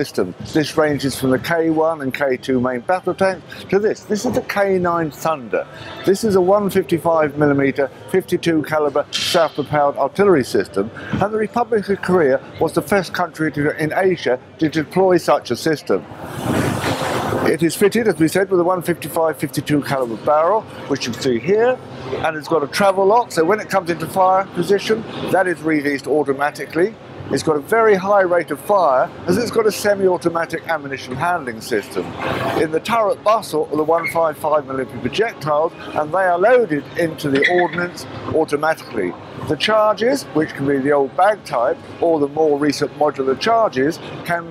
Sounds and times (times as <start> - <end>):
Speech: 0.0 - 16.0, 17.4 - 44.5
Inside, large room or hall: 0.0 - 44.5.